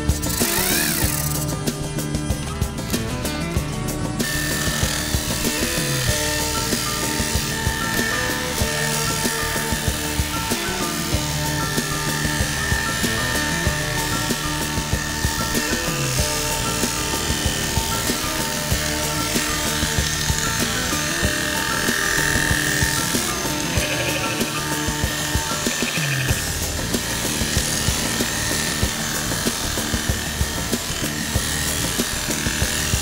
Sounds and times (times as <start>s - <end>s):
Music: 0.0s - 33.0s.